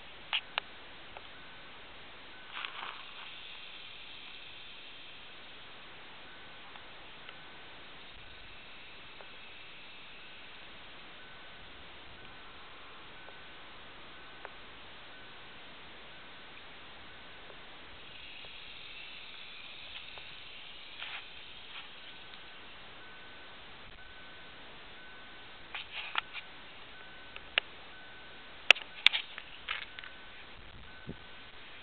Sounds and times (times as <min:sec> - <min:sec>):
Outside, rural or natural: 0:00.0 - 0:31.8.